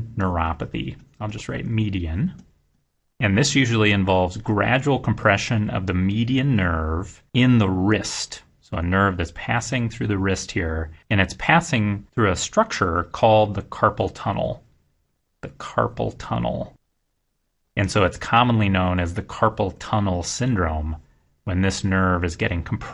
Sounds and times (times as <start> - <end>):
Narration, monologue: 0.0 - 22.9.